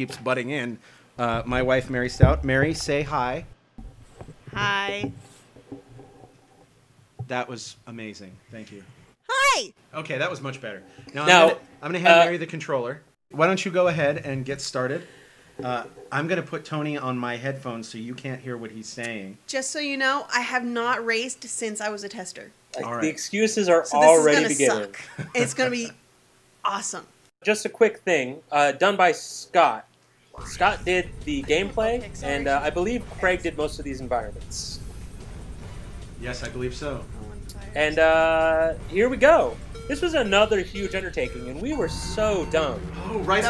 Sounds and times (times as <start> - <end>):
Speech: 0.0 - 3.4, 7.3 - 15.0, 22.8 - 26.0, 26.7 - 34.8, 36.2 - 43.5.